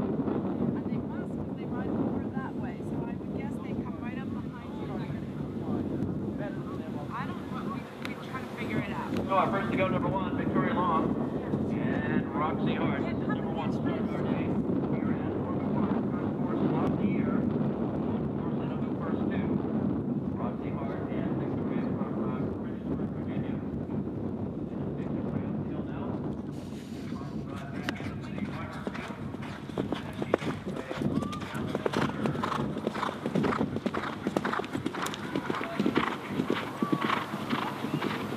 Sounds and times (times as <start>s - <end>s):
Speech: 0.6s - 17.5s, 18.4s - 19.6s, 20.4s - 23.8s, 24.6s - 26.2s, 27.0s - 32.6s.